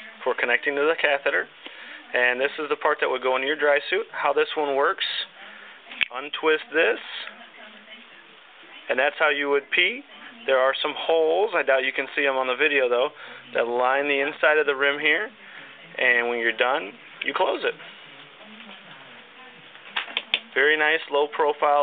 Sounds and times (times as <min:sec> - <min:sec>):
Speech: 0:00.0 - 0:21.8.